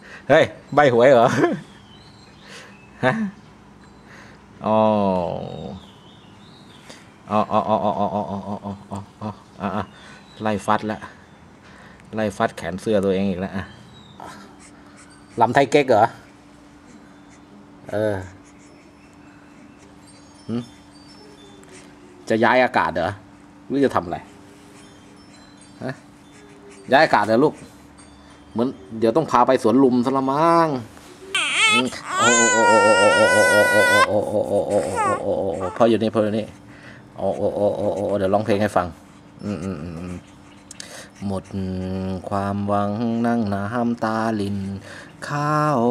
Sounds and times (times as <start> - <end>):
Speech: 12.2 - 13.7, 22.3 - 24.3, 26.9 - 27.7, 28.6 - 30.9, 31.7 - 36.6, 37.2 - 40.2, 41.2 - 45.9.